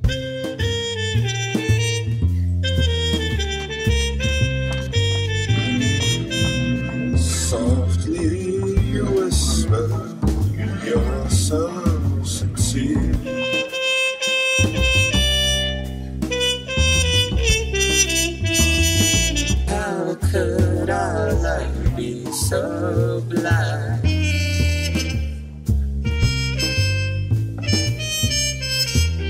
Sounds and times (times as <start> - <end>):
Jazz: 0.0 - 29.3.